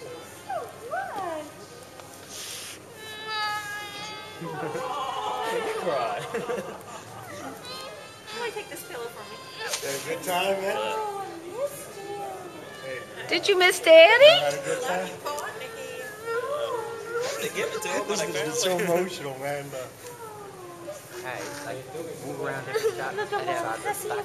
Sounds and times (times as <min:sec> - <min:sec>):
Music: 0:03.0 - 0:05.9, 0:07.2 - 0:10.3
Baby cry, infant cry: 0:07.2 - 0:08.4.